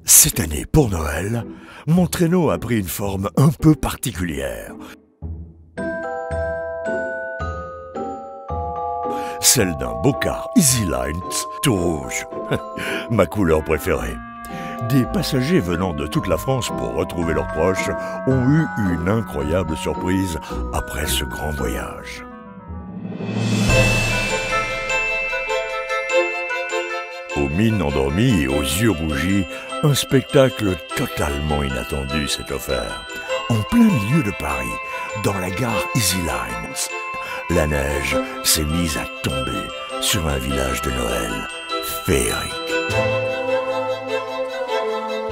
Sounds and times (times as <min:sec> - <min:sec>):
Speech: 0:00.0 - 0:05.0, 0:09.4 - 0:12.3, 0:13.0 - 0:14.2, 0:14.8 - 0:22.2, 0:27.4 - 0:42.6
Music: 0:00.0 - 0:45.3.